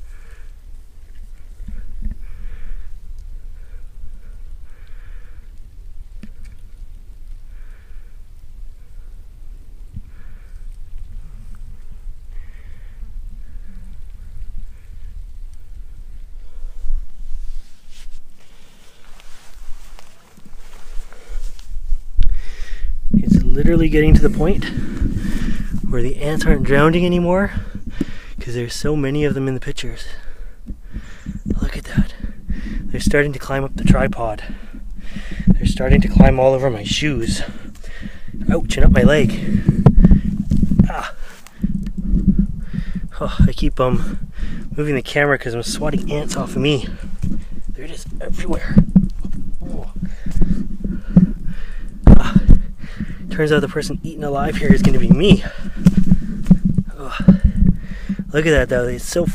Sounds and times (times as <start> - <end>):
Outside, rural or natural: 0.0 - 59.3
Speech: 23.2 - 24.8, 25.9 - 27.6, 28.4 - 30.2, 31.6 - 32.2, 32.9 - 34.6, 35.6 - 37.6, 38.5 - 39.4, 43.2 - 44.1, 44.8 - 47.0, 47.8 - 48.8, 49.6 - 50.0, 53.3 - 55.6, 58.3 - 59.3.